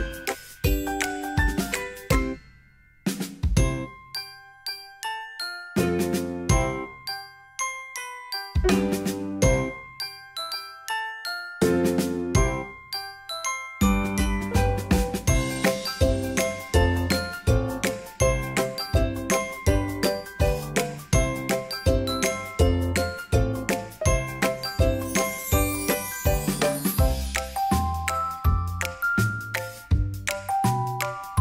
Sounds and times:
Music: 0.0s - 31.4s.

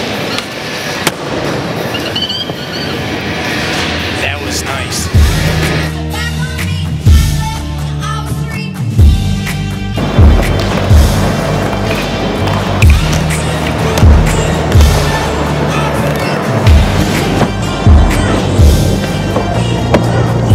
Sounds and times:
Music: 4.3s - 20.5s
Skateboard: 10.3s - 20.5s.

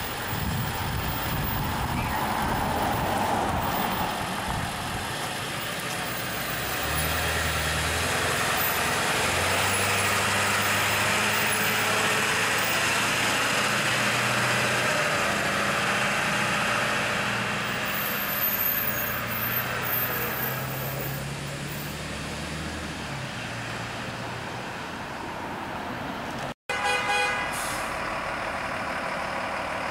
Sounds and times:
Truck: 0.0s - 29.9s.

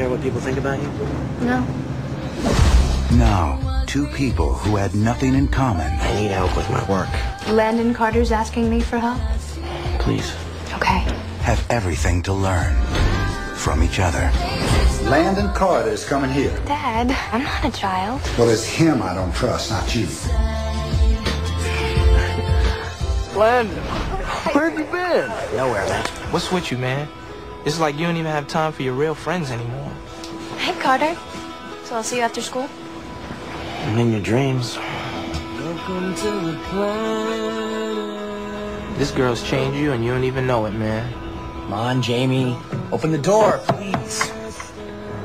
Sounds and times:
Music: 0.0s - 45.2s.

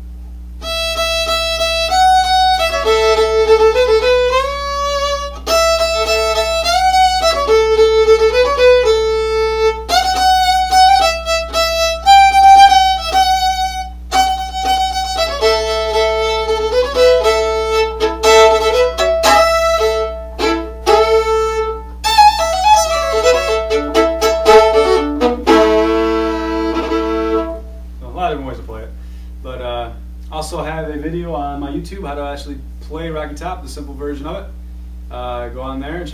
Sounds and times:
Violin, fiddle: 0.6s - 27.7s
Speech: 28.0s - 36.1s.

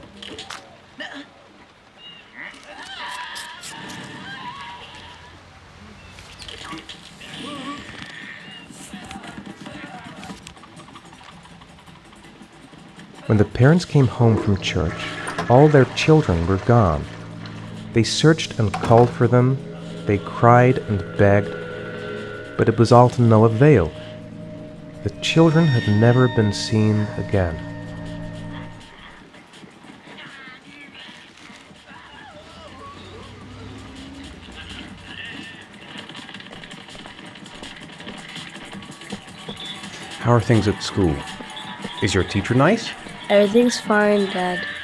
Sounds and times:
Speech: 13.3s - 17.1s, 18.0s - 21.5s, 22.6s - 24.0s, 25.1s - 27.6s, 40.2s - 41.3s, 42.0s - 44.7s
Music: 13.7s - 29.8s, 33.1s - 44.8s.

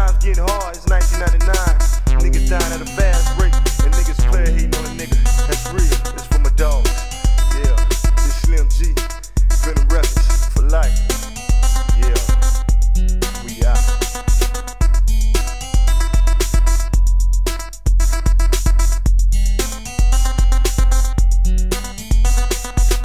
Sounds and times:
Rapping: 0.0s - 12.6s, 13.4s - 14.0s
Drum machine: 0.0s - 23.0s.

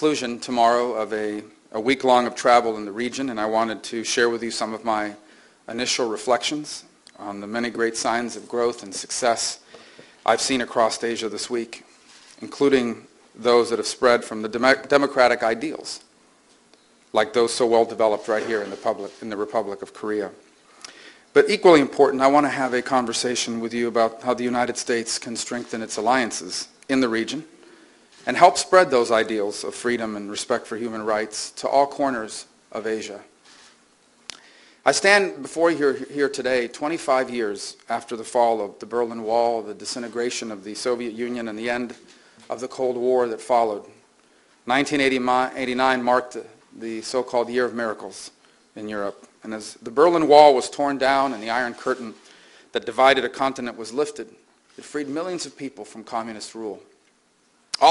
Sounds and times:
Male speech, man speaking: 0.0s - 9.6s, 10.2s - 16.1s, 17.1s - 20.4s, 21.4s - 27.5s, 28.3s - 33.3s, 34.9s - 44.0s, 44.7s - 56.9s
Narration, monologue: 0.0s - 57.9s.

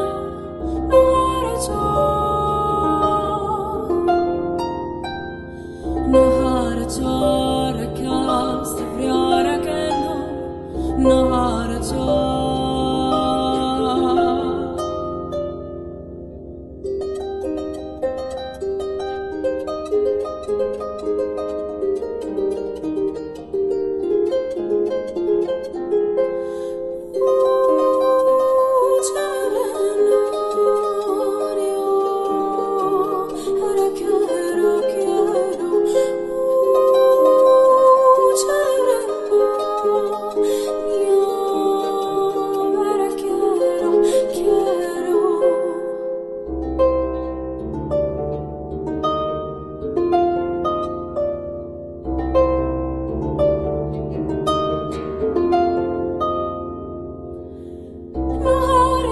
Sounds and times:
Harp: 0.0s - 59.1s
Pizzicato: 0.0s - 59.1s.

